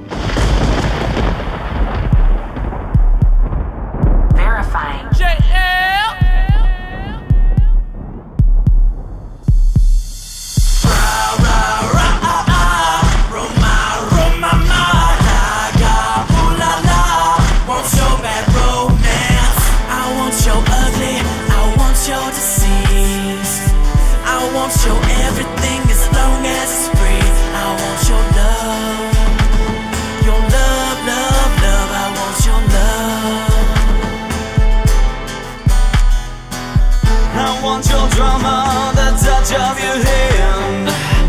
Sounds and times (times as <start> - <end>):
Rhythm and blues: 0.0 - 41.2.